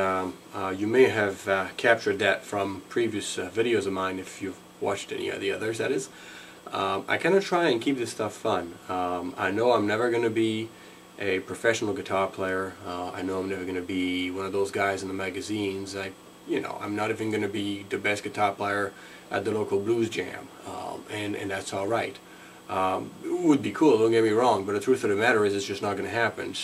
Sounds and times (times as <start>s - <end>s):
Speech: 0.0s - 26.6s.